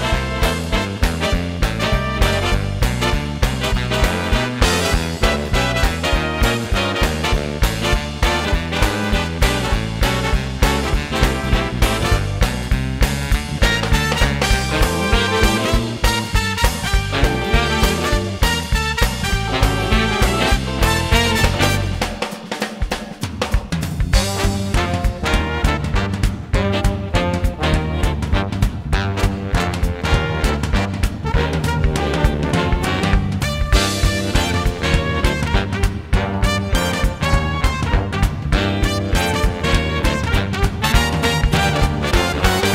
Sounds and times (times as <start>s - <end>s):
Music: 0.0s - 42.7s.